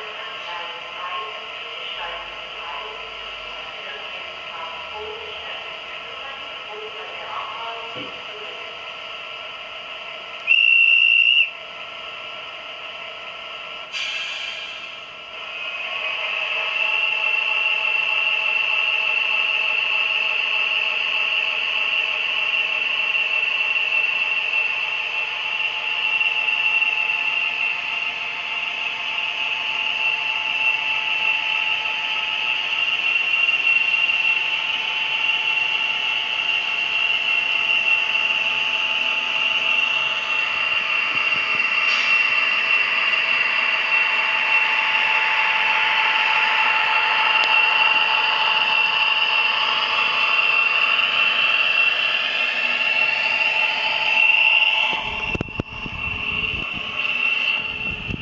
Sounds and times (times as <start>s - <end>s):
Speech: 0.0s - 8.7s.